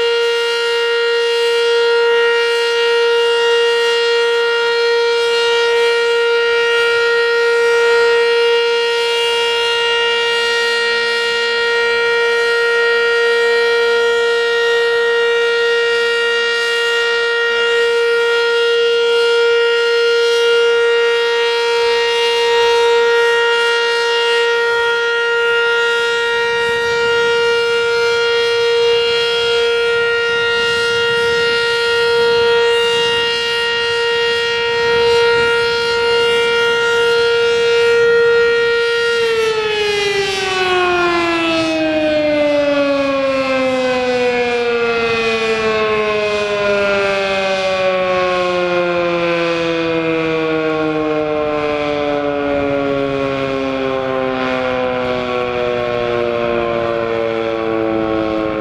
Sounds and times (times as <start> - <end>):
Civil defense siren: 0.0 - 58.6.